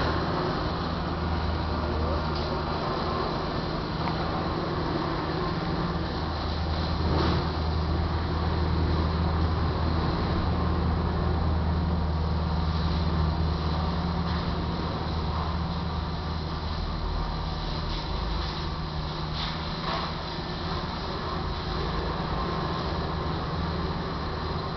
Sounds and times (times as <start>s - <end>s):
Motorboat, speedboat: 0.0s - 24.7s.